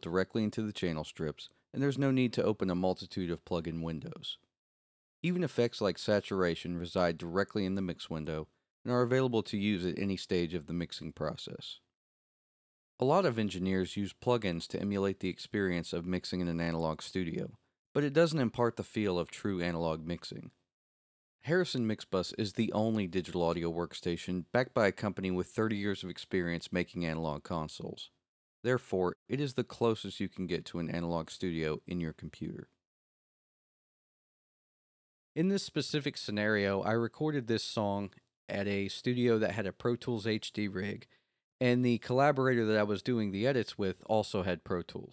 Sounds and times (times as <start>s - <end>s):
Speech: 0.0s - 4.5s, 5.2s - 11.9s, 13.0s - 20.6s, 21.4s - 32.8s, 35.4s - 45.1s.